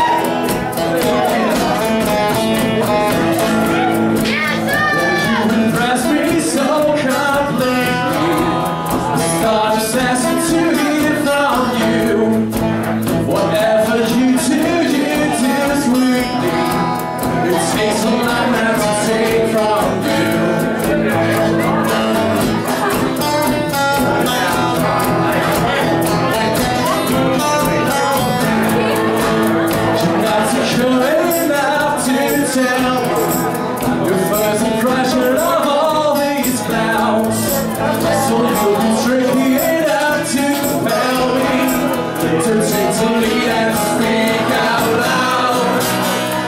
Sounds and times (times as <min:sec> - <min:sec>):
Music: 0:00.0 - 0:46.4
Speech: 0:00.0 - 0:46.4.